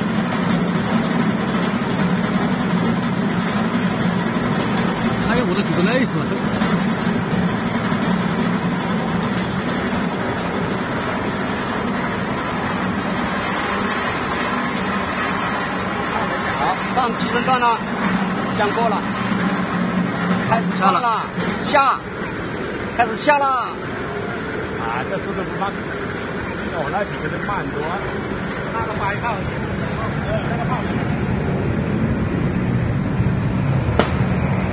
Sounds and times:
Speech: 5.2s - 6.5s, 16.0s - 17.9s, 18.6s - 19.1s, 20.5s - 22.1s, 23.0s - 23.8s, 24.8s - 25.8s, 26.7s - 28.1s, 28.7s - 31.0s.

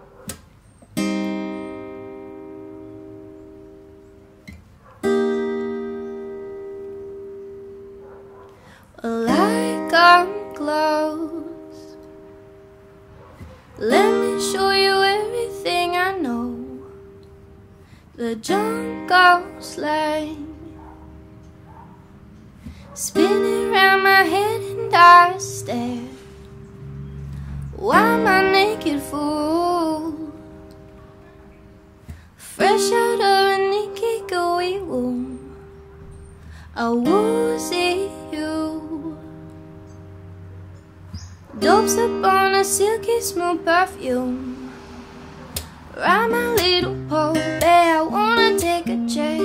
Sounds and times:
Music: 1.0s - 8.0s, 9.1s - 13.1s, 13.8s - 22.4s, 23.1s - 49.4s.

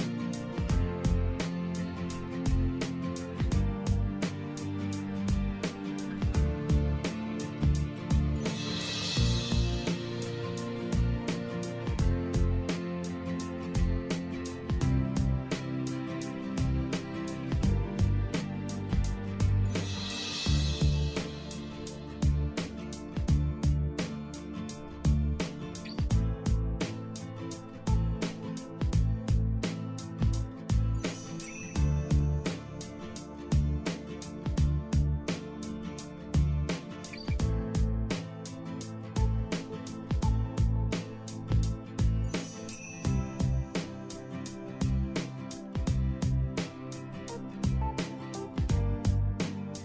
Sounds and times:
Music: 0.0s - 49.8s.

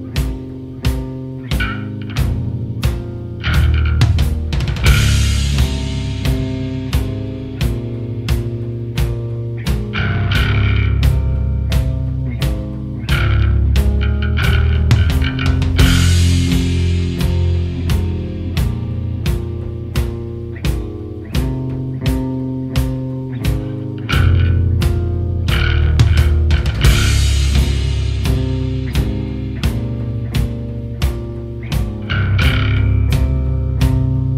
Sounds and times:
Grunge: 0.0s - 34.3s
Progressive rock: 0.0s - 34.3s.

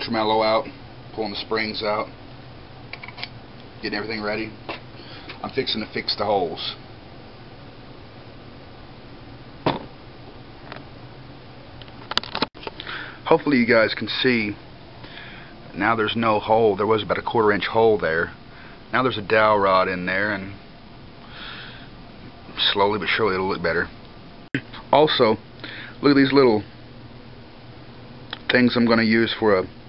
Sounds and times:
Speech: 0.0s - 2.1s, 3.8s - 4.6s, 5.4s - 6.8s, 13.2s - 14.6s, 15.7s - 20.6s, 22.5s - 24.0s, 24.8s - 25.4s, 26.0s - 26.7s, 28.4s - 29.7s.

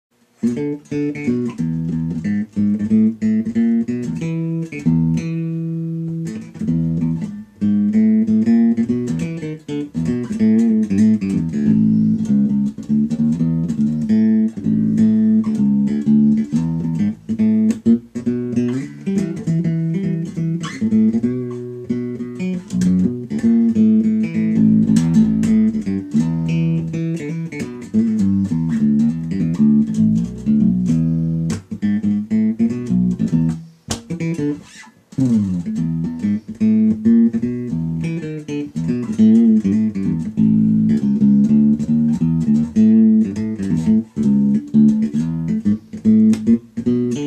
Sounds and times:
Guitar: 0.1s - 47.2s.

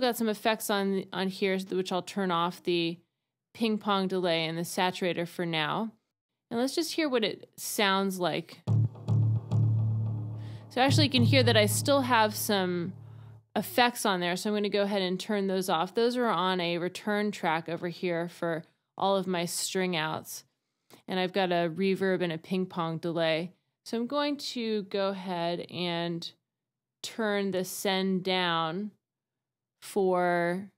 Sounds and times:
Speech: 0.0s - 3.0s, 3.6s - 8.6s, 10.8s - 13.0s, 13.6s - 20.4s, 21.1s - 26.4s, 27.0s - 29.0s, 29.8s - 30.7s
Sampler: 8.7s - 13.4s.

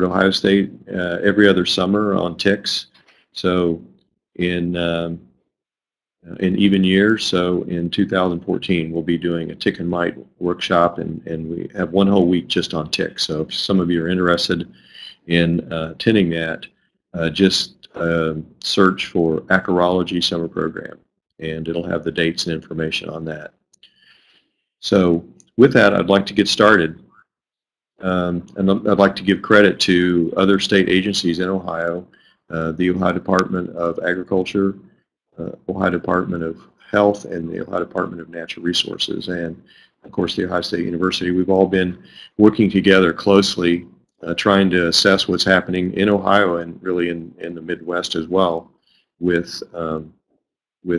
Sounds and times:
Speech: 0.0s - 5.3s, 6.3s - 23.6s, 24.8s - 27.1s, 28.0s - 50.2s.

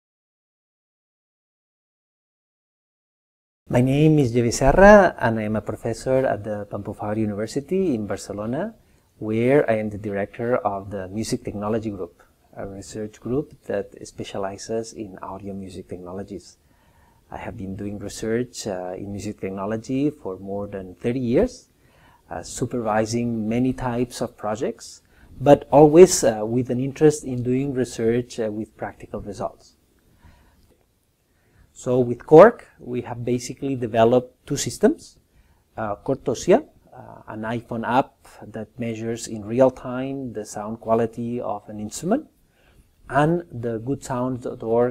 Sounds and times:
Speech: 3.7s - 16.6s, 17.3s - 21.7s, 22.3s - 29.8s, 31.8s - 35.2s, 35.8s - 42.3s, 43.1s - 44.9s.

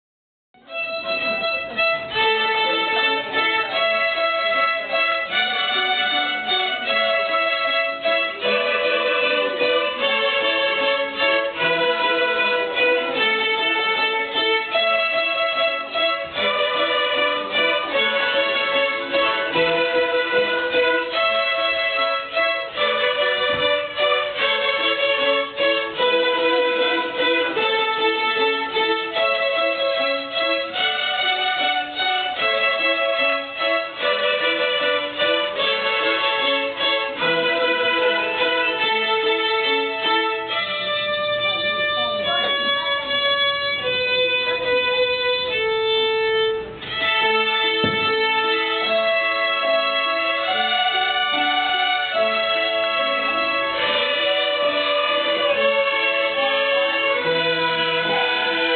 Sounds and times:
Violin, fiddle: 0.6s - 58.7s.

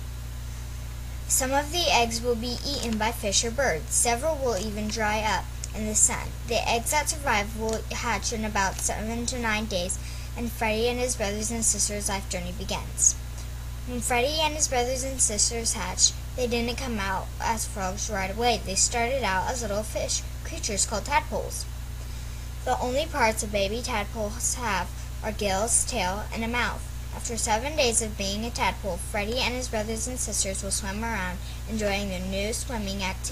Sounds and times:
Speech: 1.3s - 13.2s, 13.9s - 21.7s, 22.6s - 33.3s.

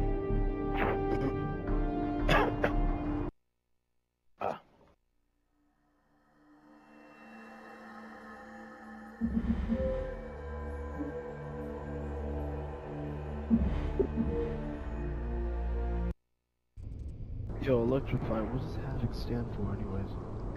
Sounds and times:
Music: 0.0s - 3.3s, 5.8s - 16.2s.

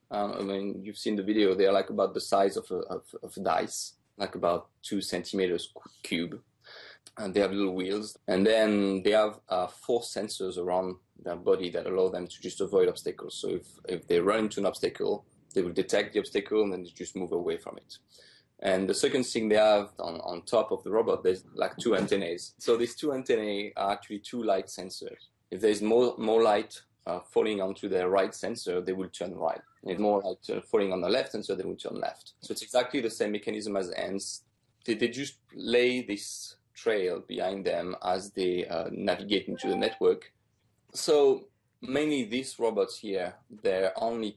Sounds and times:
Speech: 0.0s - 18.0s, 18.6s - 40.3s, 41.0s - 44.3s.

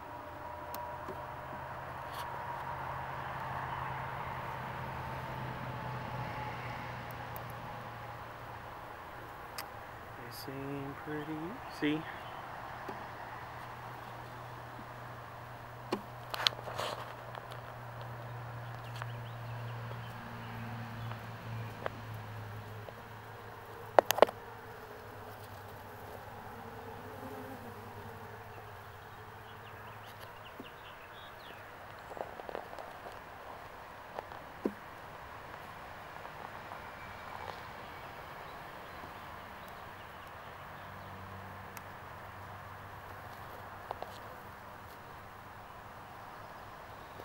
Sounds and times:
Bee, wasp, etc.: 9.6s - 13.1s, 18.8s - 32.2s.

